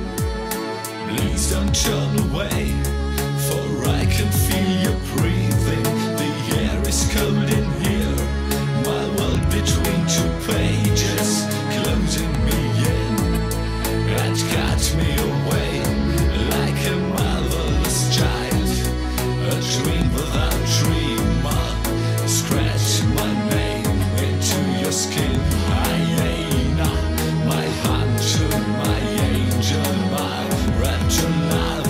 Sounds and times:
Exciting music: 0.0s - 31.8s.

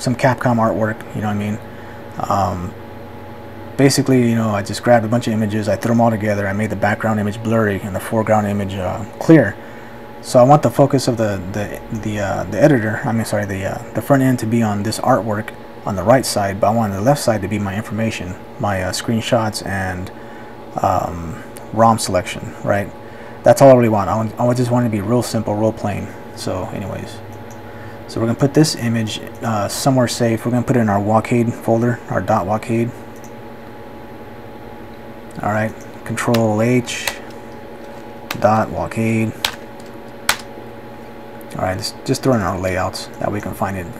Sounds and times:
Speech: 0.0s - 2.8s, 3.8s - 9.6s, 10.2s - 20.2s, 20.8s - 27.3s, 28.1s - 33.0s, 35.4s - 37.3s, 38.3s - 39.5s, 41.5s - 44.0s.

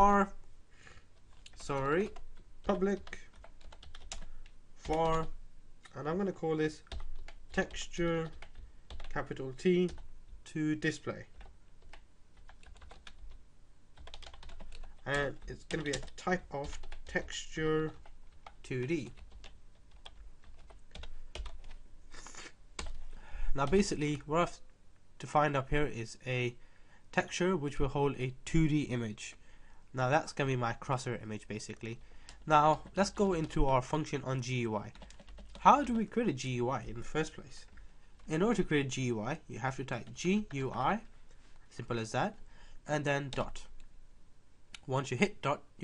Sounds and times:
Speech: 0.0s - 0.4s, 1.6s - 3.3s, 4.9s - 6.9s, 7.6s - 8.4s, 9.1s - 11.3s, 15.0s - 18.0s, 18.6s - 19.2s, 23.6s - 24.6s, 25.2s - 26.6s, 27.2s - 35.0s, 35.6s - 37.7s, 38.3s - 41.1s, 41.7s - 43.7s, 44.8s - 45.8s
Computer keyboard: 1.3s - 6.0s, 6.9s - 9.2s, 11.4s - 13.4s, 14.0s - 17.2s, 17.9s - 21.8s, 34.9s - 35.6s.

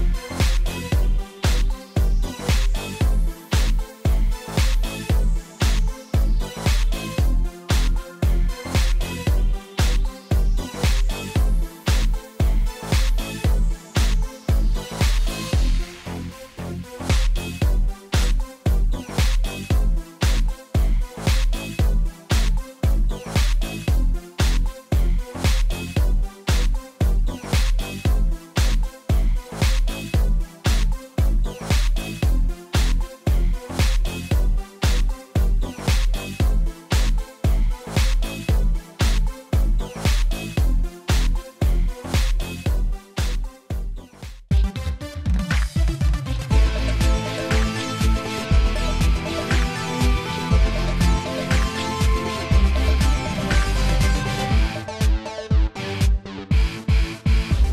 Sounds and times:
Music: 0.0s - 57.7s.

